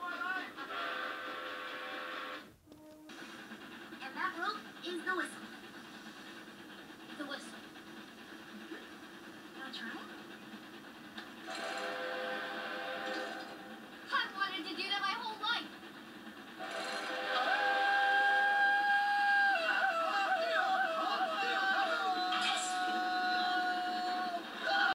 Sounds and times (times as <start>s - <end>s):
Train whistle: 0.6s - 3.8s, 11.5s - 14.0s, 16.6s - 24.9s.